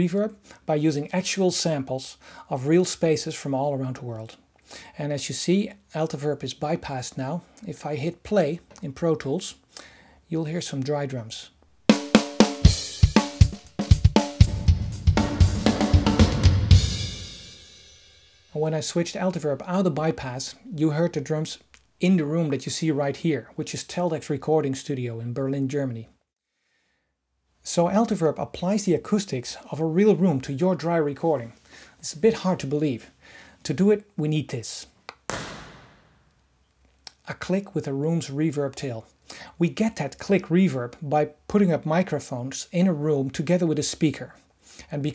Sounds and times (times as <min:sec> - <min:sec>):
Speech: 0:00.0 - 0:04.4, 0:05.0 - 0:09.6, 0:10.3 - 0:11.6, 0:18.6 - 0:26.2, 0:27.6 - 0:35.0, 0:37.1 - 0:45.1
Music: 0:11.9 - 0:18.6.